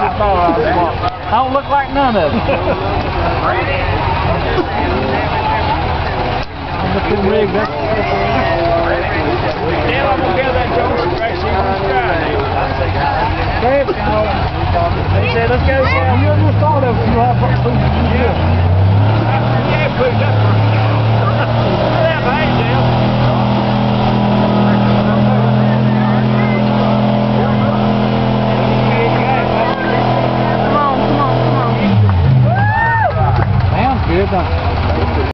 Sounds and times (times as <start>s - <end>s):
Speech: 0.0s - 18.5s, 19.2s - 23.2s, 24.3s - 32.0s
Truck: 0.0s - 35.3s.